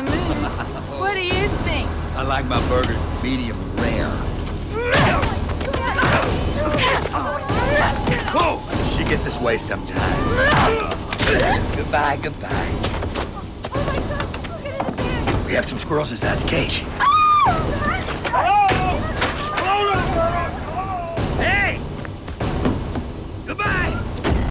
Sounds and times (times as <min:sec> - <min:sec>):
Music: 0:00.0 - 0:24.5.